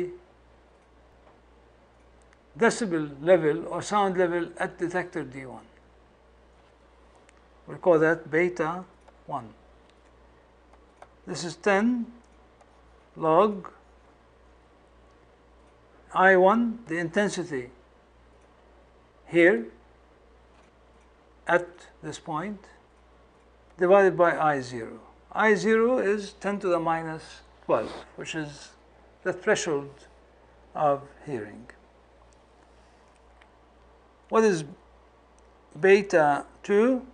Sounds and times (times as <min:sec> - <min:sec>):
Speech: 0:00.0 - 0:00.2, 0:02.6 - 0:05.8, 0:07.7 - 0:09.6, 0:11.2 - 0:12.2, 0:13.2 - 0:13.8, 0:16.1 - 0:17.8, 0:19.3 - 0:19.8, 0:21.5 - 0:22.8, 0:23.8 - 0:30.1, 0:30.7 - 0:31.8, 0:34.3 - 0:34.8, 0:35.7 - 0:37.1.